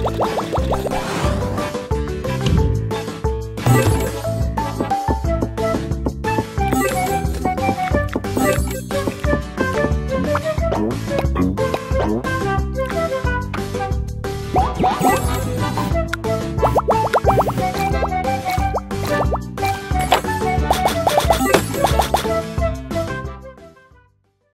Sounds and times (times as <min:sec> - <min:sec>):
Music: 0:00.0 - 0:24.5.